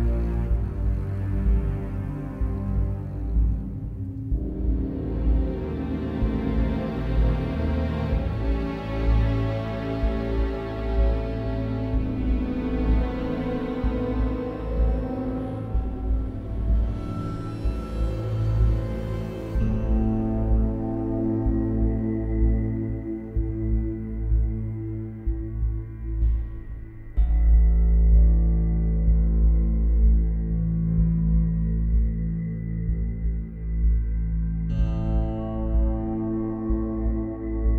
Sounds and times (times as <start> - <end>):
Music: 0.0 - 37.7.